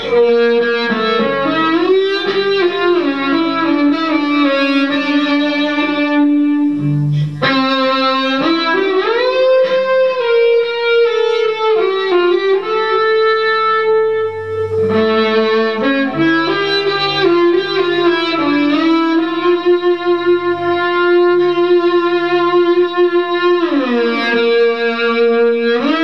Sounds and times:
Music: 0.0s - 26.0s.

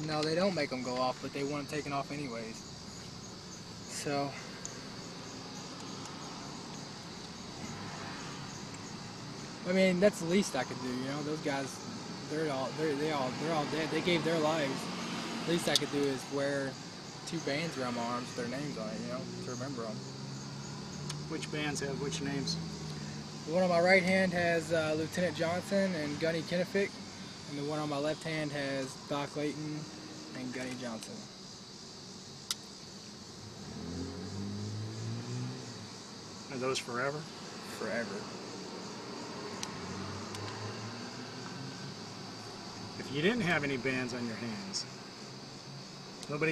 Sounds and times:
Speech: 0.0s - 2.6s, 3.9s - 4.4s, 9.6s - 14.9s, 15.5s - 20.0s, 21.3s - 22.6s, 23.5s - 26.9s, 27.5s - 31.3s, 36.5s - 38.3s, 43.0s - 44.9s, 46.3s - 46.5s
Outside, urban or manmade: 0.0s - 46.5s
Car: 0.1s - 46.5s.

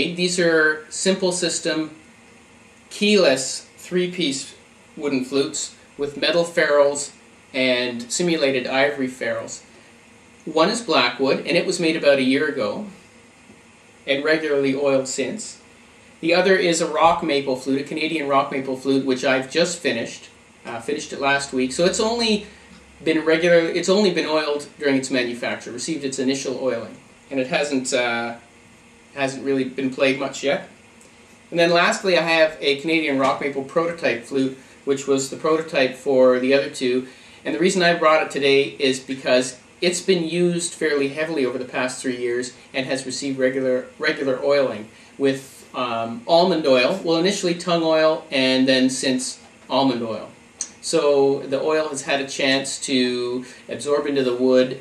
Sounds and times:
Speech: 0.0s - 2.0s, 2.9s - 9.7s, 10.4s - 13.0s, 14.0s - 15.6s, 16.2s - 28.5s, 29.1s - 30.7s, 31.5s - 54.8s.

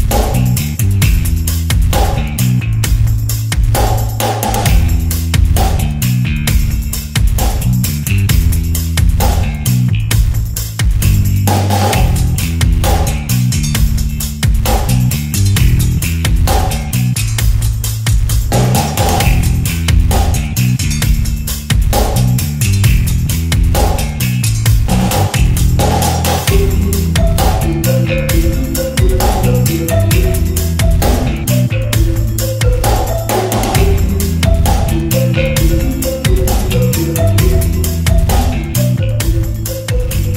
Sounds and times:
Music: 0.0s - 40.3s.

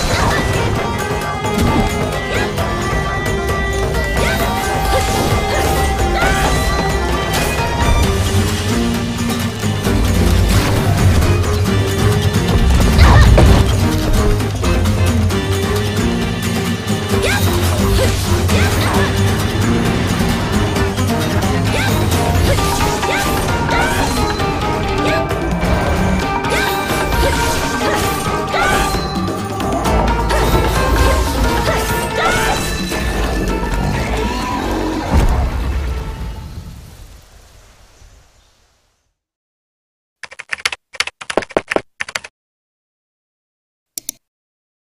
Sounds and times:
Music: 0.0s - 36.5s
Outside, rural or natural: 0.0s - 39.4s.

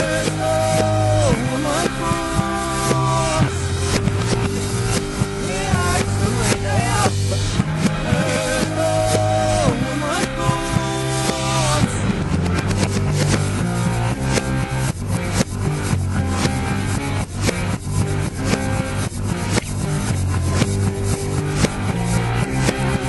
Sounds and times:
Music: 0.0s - 23.0s.

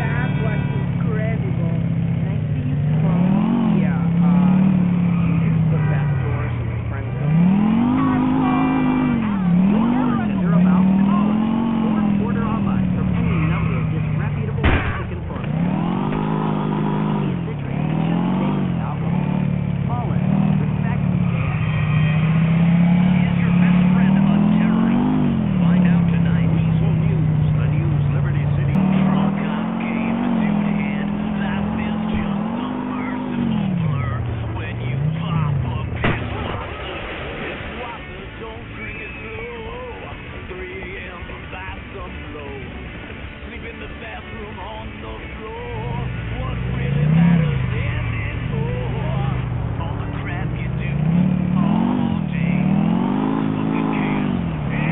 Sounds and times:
Motor vehicle (road): 0.0s - 54.9s
Speech: 0.0s - 54.9s.

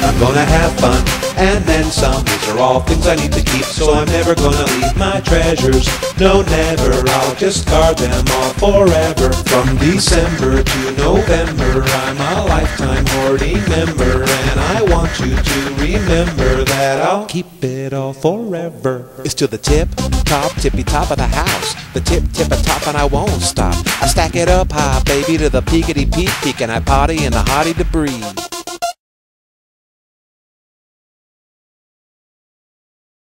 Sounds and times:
Music: 0.0s - 17.6s, 19.2s - 29.0s
Rapping: 0.0s - 28.4s.

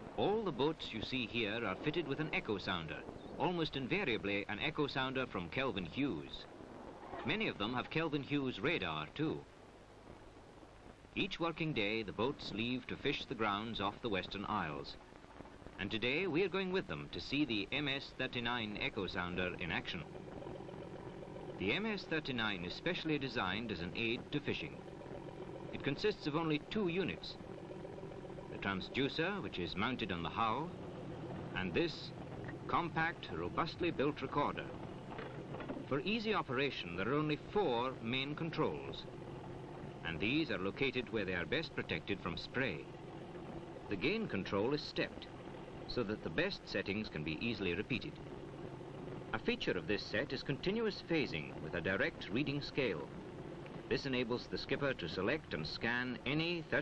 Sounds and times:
Speech: 0.2s - 6.5s, 7.2s - 9.5s, 11.2s - 15.0s, 15.8s - 20.1s, 21.6s - 24.8s, 25.8s - 27.4s, 28.6s - 30.7s, 31.6s - 32.1s, 32.7s - 34.7s, 35.9s - 39.1s, 40.0s - 42.9s, 43.9s - 45.3s, 45.9s - 48.2s, 49.4s - 53.1s, 53.9s - 56.8s.

